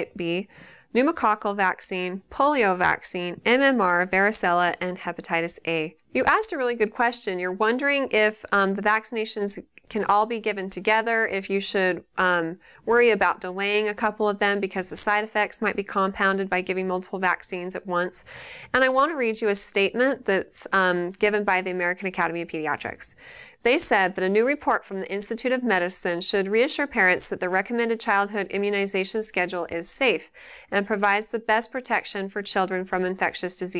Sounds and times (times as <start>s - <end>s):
Speech: 0.0s - 33.7s.